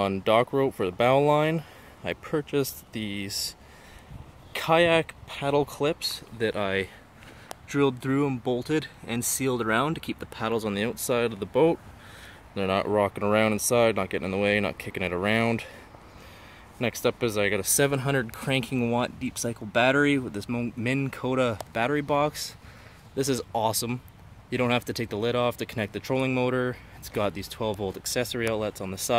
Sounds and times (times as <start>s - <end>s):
Speech: 0.0s - 3.6s, 4.5s - 7.0s, 7.7s - 11.8s, 12.6s - 15.8s, 16.8s - 22.6s, 23.2s - 29.1s.